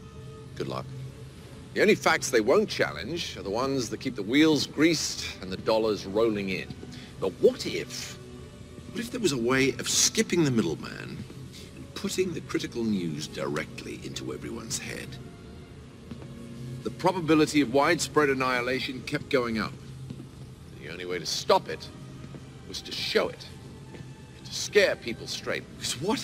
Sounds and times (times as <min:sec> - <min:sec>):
Music: 0:00.0 - 0:26.2
Narration, monologue: 0:00.3 - 0:26.2
Male speech, man speaking: 0:00.6 - 0:00.9, 0:01.8 - 0:08.2, 0:09.0 - 0:11.2, 0:11.8 - 0:15.2, 0:16.8 - 0:19.8, 0:20.8 - 0:21.9, 0:22.7 - 0:23.5, 0:24.4 - 0:26.2.